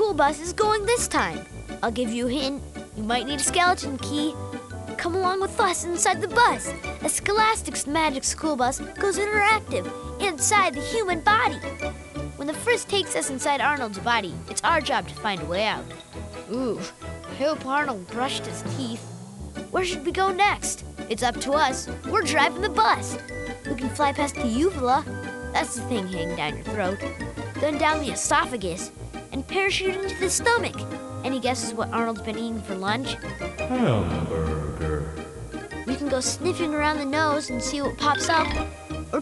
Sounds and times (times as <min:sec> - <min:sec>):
Speech: 0:00.0 - 0:04.3, 0:05.0 - 0:11.6, 0:12.4 - 0:15.8, 0:16.5 - 0:19.0, 0:19.8 - 0:25.0, 0:25.6 - 0:27.0, 0:27.6 - 0:35.0, 0:35.9 - 0:38.6
Music: 0:00.0 - 0:39.2.